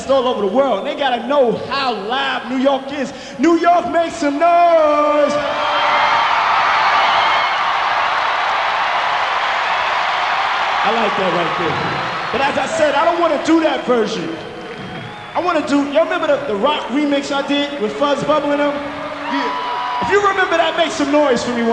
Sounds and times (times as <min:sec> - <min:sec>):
Speech: 0:00.0 - 0:05.4, 0:10.8 - 0:14.4, 0:15.4 - 0:21.7.